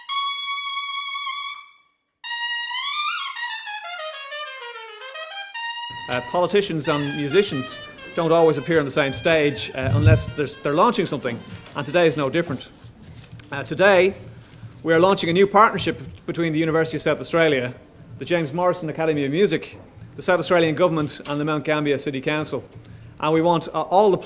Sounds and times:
Music: 0:00.0 - 0:12.2
Speech: 0:06.1 - 0:12.7, 0:13.5 - 0:14.2, 0:14.8 - 0:24.2.

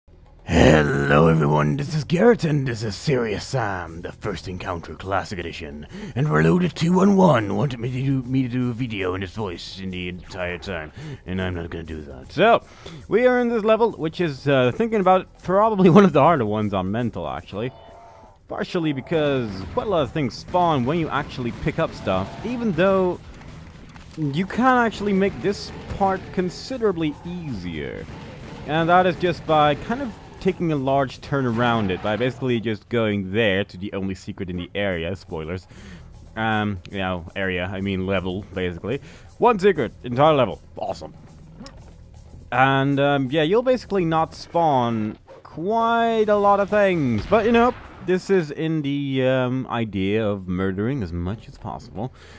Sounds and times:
Speech: 0:00.5 - 0:17.7, 0:18.5 - 0:23.2, 0:24.2 - 0:28.1, 0:28.7 - 0:35.7, 0:36.4 - 0:41.2, 0:42.5 - 0:52.2.

